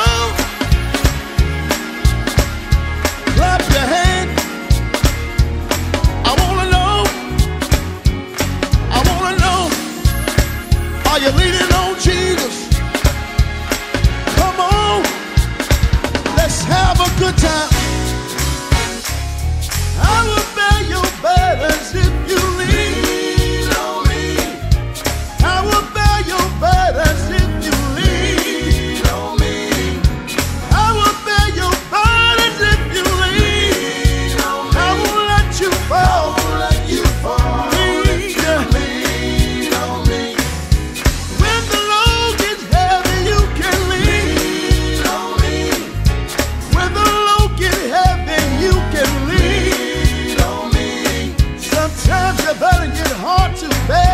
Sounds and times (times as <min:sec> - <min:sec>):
Music: 0:00.0 - 0:54.1.